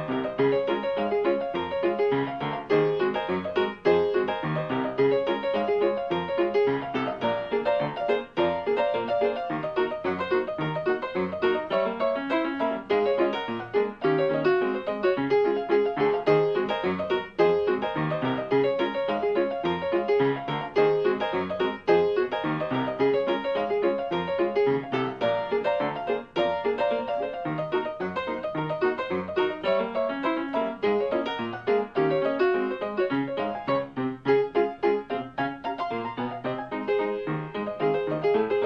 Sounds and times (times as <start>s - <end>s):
Music: 0.0s - 38.6s.